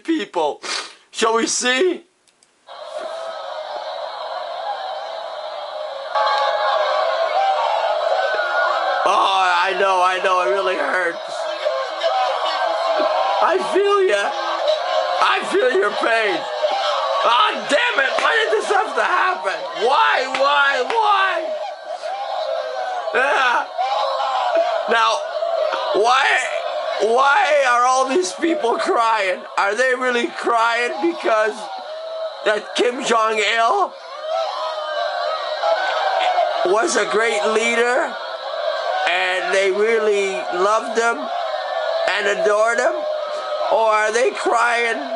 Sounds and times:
Speech: 0.0 - 2.1, 9.1 - 11.5, 13.4 - 14.3, 15.2 - 16.4, 17.2 - 21.5, 24.9 - 25.2, 25.9 - 31.7, 32.5 - 33.9, 36.6 - 38.2, 39.1 - 41.3, 42.1 - 43.0, 43.7 - 45.1.

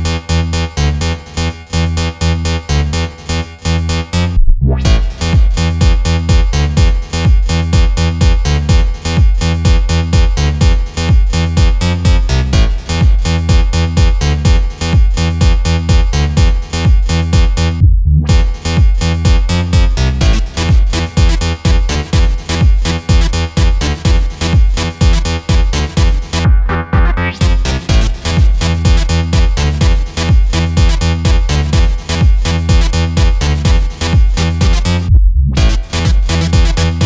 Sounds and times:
Background music: 0.0 - 37.0
Exciting music: 0.0 - 37.0
Soundtrack music: 0.0 - 37.0.

